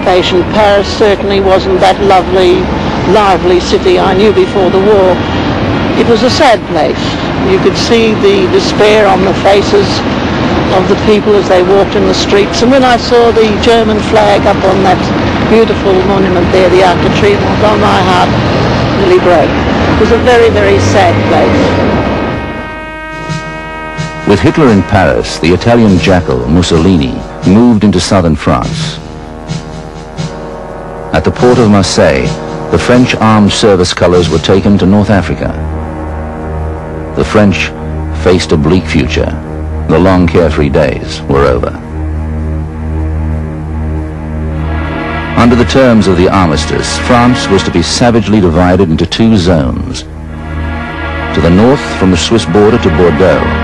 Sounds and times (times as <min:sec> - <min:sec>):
Speech: 0:00.0 - 0:05.2, 0:06.0 - 0:10.0, 0:10.7 - 0:18.3, 0:19.0 - 0:21.7, 0:24.3 - 0:29.0, 0:31.2 - 0:35.6, 0:37.2 - 0:41.8, 0:45.4 - 0:50.1, 0:51.4 - 0:53.6
Music: 0:06.0 - 0:53.6.